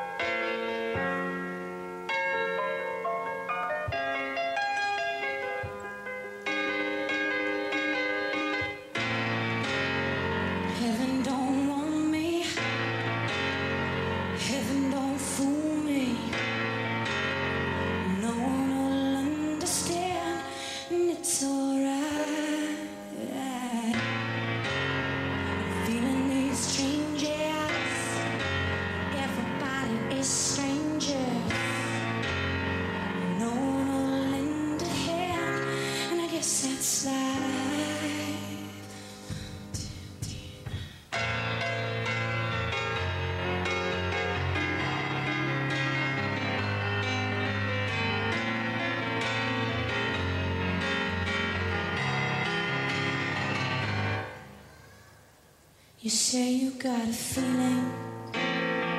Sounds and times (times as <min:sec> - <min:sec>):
Music: 0:00.0 - 0:55.5, 0:56.2 - 0:58.9.